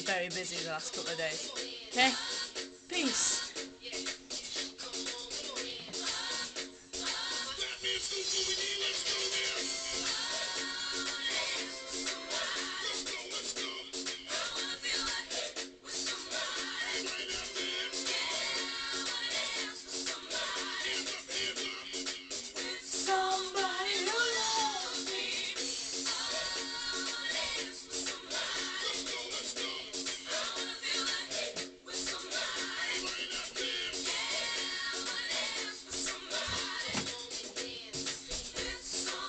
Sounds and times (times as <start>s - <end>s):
Music: 0.0s - 39.2s.